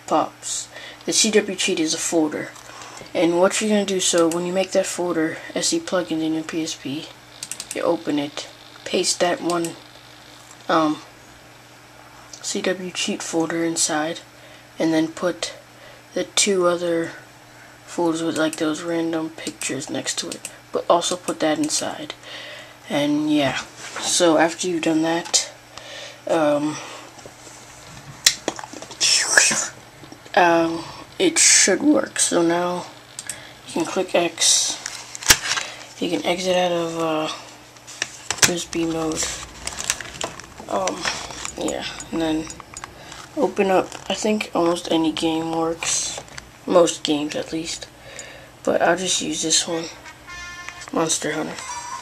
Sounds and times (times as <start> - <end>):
Speech: 0.0 - 9.8, 10.7 - 11.1, 12.4 - 17.2, 17.9 - 22.2, 22.9 - 25.6, 26.3 - 26.8, 29.0 - 33.0, 33.7 - 34.8, 36.0 - 37.5, 38.4 - 39.4, 40.6 - 42.6, 43.4 - 47.9, 48.6 - 50.0, 50.8 - 51.8.